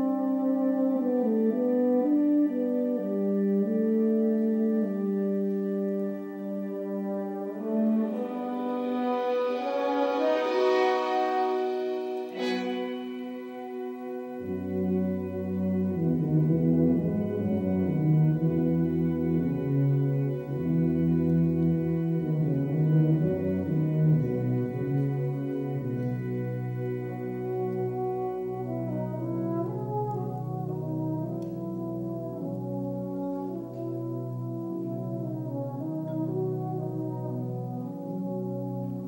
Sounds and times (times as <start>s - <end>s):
Brass instrument: 0.0s - 39.0s
Classical music: 0.0s - 39.0s
Orchestra: 0.0s - 39.0s.